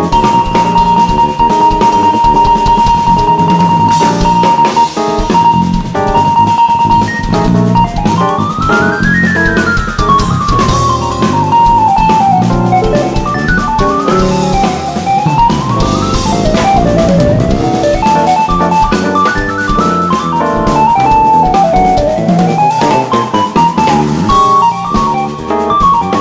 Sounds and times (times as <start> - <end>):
Drum: 0.0 - 26.2
Drum kit: 0.0 - 26.2
Jazz: 0.0 - 26.2
Keyboard (musical): 0.0 - 26.2.